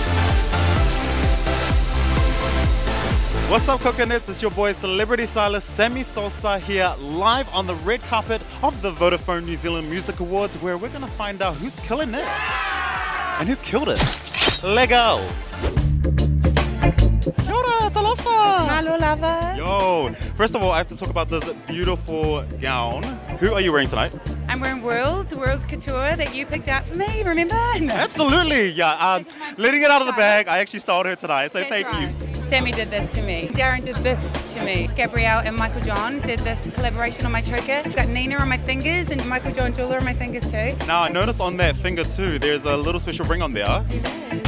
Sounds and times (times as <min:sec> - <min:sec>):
Music: 0:00.0 - 0:44.4
Speech: 0:14.6 - 0:15.3, 0:17.5 - 0:43.8.